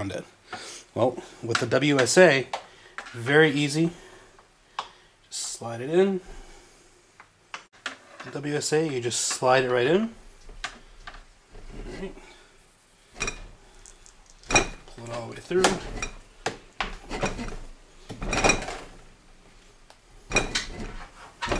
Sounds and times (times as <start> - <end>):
Speech: 0.0 - 0.3, 1.0 - 2.5, 3.2 - 4.0, 5.3 - 6.3, 8.2 - 10.2, 15.0 - 15.9
Tools: 13.2 - 16.2, 16.8 - 19.0, 20.3 - 21.5.